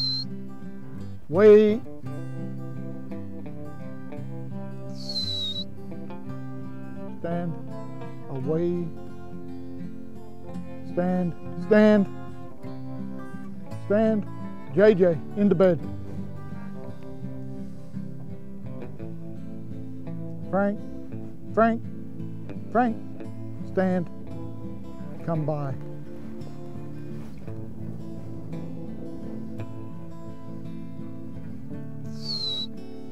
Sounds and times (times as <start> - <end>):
Music: 0.0 - 33.1
Speech: 1.3 - 1.9, 7.2 - 7.6, 8.3 - 9.0, 10.9 - 12.1, 13.9 - 15.8, 20.5 - 20.8, 21.5 - 21.8, 22.7 - 23.0, 23.7 - 24.1, 25.2 - 25.8.